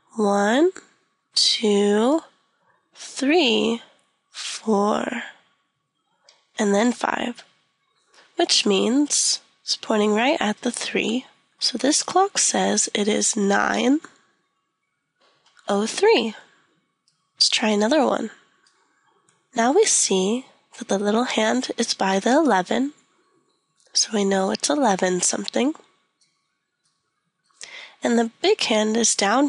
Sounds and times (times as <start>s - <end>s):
Speech: 0.1s - 0.8s, 1.4s - 2.3s, 3.0s - 3.8s, 4.4s - 5.3s, 6.6s - 7.4s, 8.4s - 14.1s, 15.7s - 16.4s, 17.4s - 18.3s, 19.6s - 22.9s, 24.0s - 25.8s, 27.6s - 29.4s.